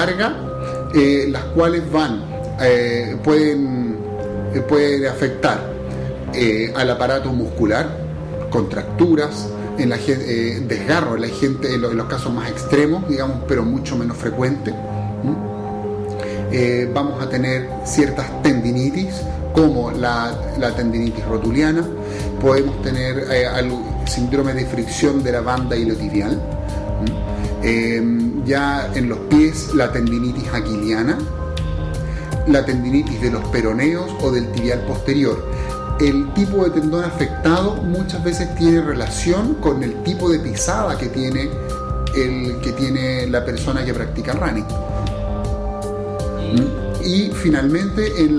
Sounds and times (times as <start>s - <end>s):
Speech: 0.0s - 5.7s, 6.4s - 15.4s, 16.5s - 26.4s, 27.0s - 31.3s, 32.5s - 35.4s, 36.0s - 41.5s, 42.1s - 44.8s, 46.4s - 48.3s
Music: 0.0s - 48.3s.